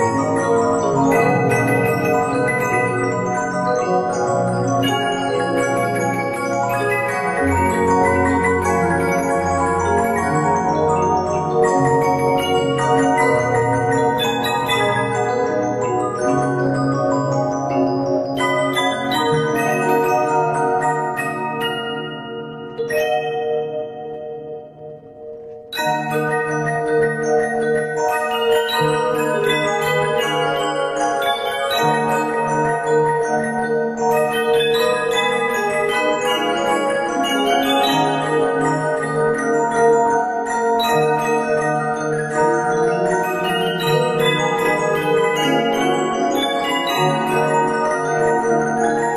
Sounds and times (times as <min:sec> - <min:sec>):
Bell: 0:00.0 - 0:49.1.